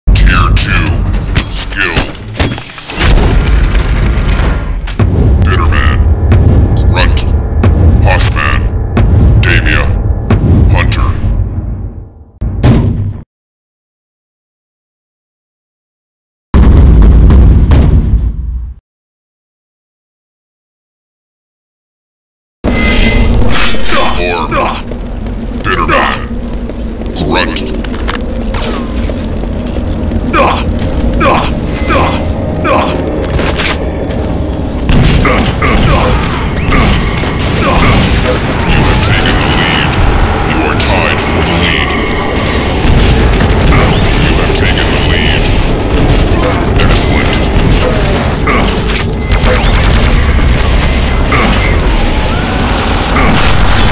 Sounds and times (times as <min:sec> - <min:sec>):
Speech: 0:00.1 - 0:02.2, 0:05.4 - 0:06.1, 0:06.8 - 0:07.4, 0:08.0 - 0:08.7, 0:09.4 - 0:10.0, 0:10.7 - 0:11.2, 0:23.8 - 0:24.8, 0:25.6 - 0:26.3, 0:27.2 - 0:27.7, 0:30.3 - 0:33.0, 0:35.2 - 0:36.9, 0:37.6 - 0:38.0, 0:38.6 - 0:42.0, 0:43.7 - 0:45.5, 0:46.4 - 0:47.9.